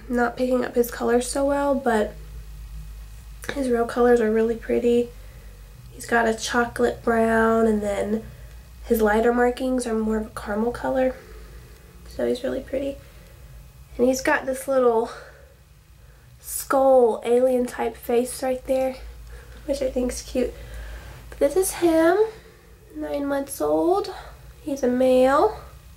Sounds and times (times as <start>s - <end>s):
Speech: 0.0s - 2.2s, 3.4s - 5.1s, 5.9s - 8.3s, 8.9s - 11.2s, 12.1s - 13.0s, 14.0s - 15.3s, 16.4s - 19.1s, 19.7s - 20.6s, 21.4s - 25.7s
Inside, small room: 0.0s - 25.9s.